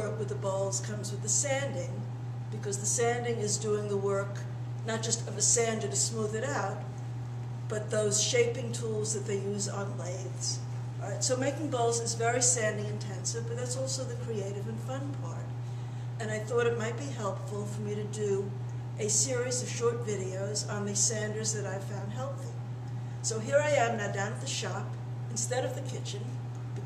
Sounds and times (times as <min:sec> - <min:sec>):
Speech: 0:00.0 - 0:06.9, 0:07.7 - 0:15.5, 0:16.2 - 0:22.6, 0:23.2 - 0:26.4.